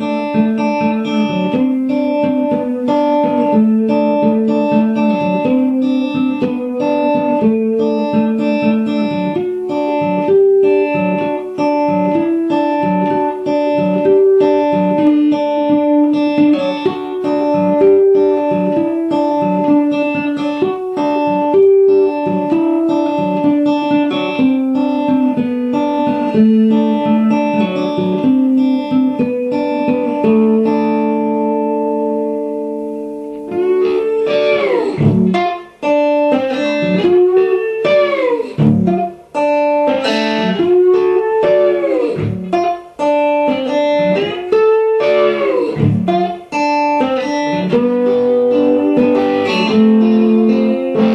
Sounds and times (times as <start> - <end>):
Music: 0.0 - 51.1.